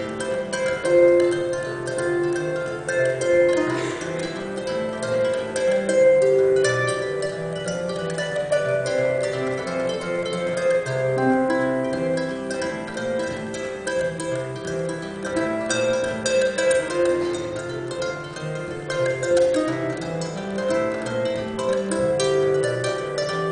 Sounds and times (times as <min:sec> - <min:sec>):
Harp: 0:00.0 - 0:23.5
Pizzicato: 0:00.0 - 0:23.5.